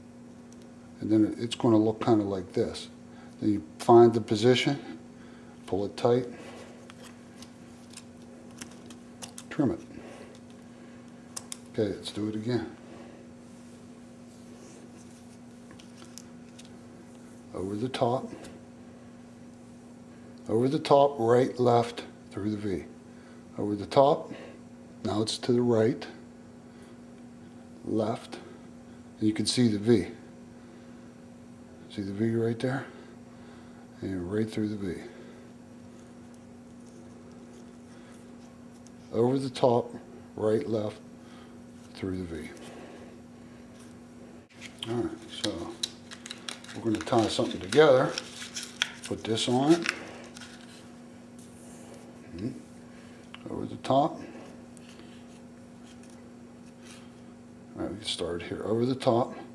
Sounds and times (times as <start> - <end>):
Inside, small room: 0.0 - 59.5
Speech: 1.0 - 5.0, 5.7 - 6.4, 9.5 - 9.9, 11.8 - 12.8, 17.5 - 18.5, 20.5 - 22.9, 23.6 - 24.4, 25.0 - 26.2, 27.8 - 28.5, 29.2 - 30.3, 31.9 - 33.0, 34.0 - 35.2, 39.1 - 41.0, 41.9 - 42.6, 44.8 - 45.8, 46.8 - 48.2, 49.1 - 50.0, 52.3 - 52.6, 53.4 - 54.3, 57.8 - 59.5.